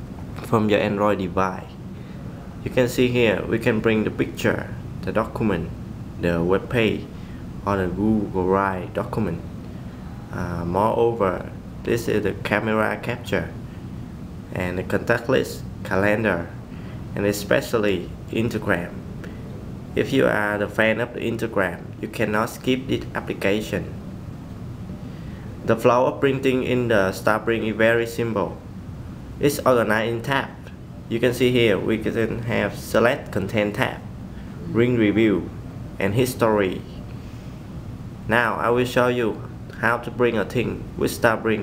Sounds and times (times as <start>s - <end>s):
Speech: 0.4s - 1.8s, 2.6s - 9.5s, 10.3s - 13.6s, 14.5s - 16.6s, 17.2s - 19.0s, 20.0s - 24.0s, 25.6s - 28.7s, 29.4s - 37.0s, 38.3s - 41.6s.